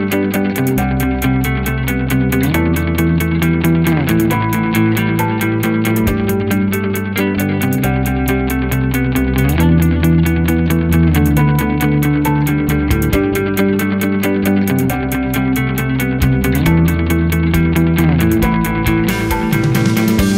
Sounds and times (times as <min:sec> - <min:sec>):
Music: 0:00.0 - 0:20.3.